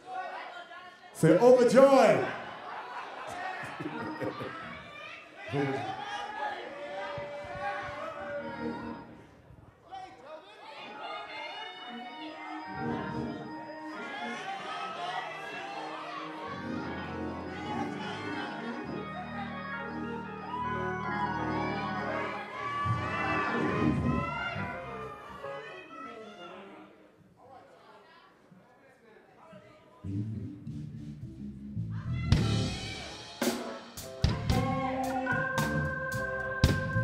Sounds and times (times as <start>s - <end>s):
Speech: 1.2s - 2.4s
Music: 7.4s - 9.4s, 11.1s - 26.2s, 30.0s - 37.0s.